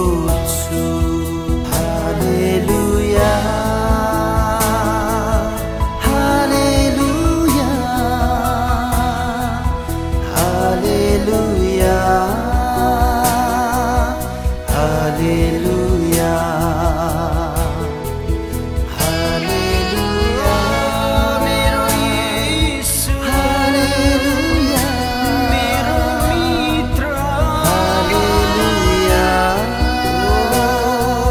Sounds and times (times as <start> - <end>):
Singing: 0.0 - 18.1, 18.9 - 31.3
Christmas music: 0.0 - 31.3.